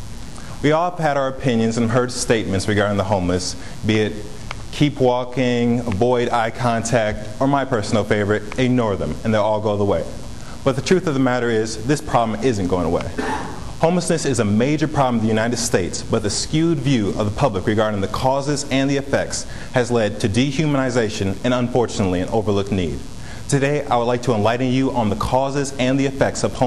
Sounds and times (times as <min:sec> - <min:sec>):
Narration, monologue: 0:00.0 - 0:26.6
Male speech, man speaking: 0:00.6 - 0:13.2, 0:13.8 - 0:26.6.